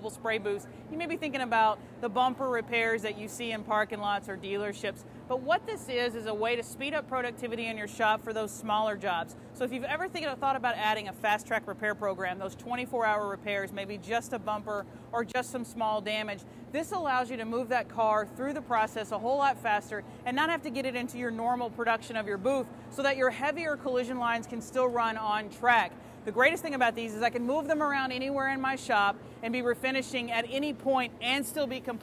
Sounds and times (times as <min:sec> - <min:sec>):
Speech: 0:00.0 - 0:32.0.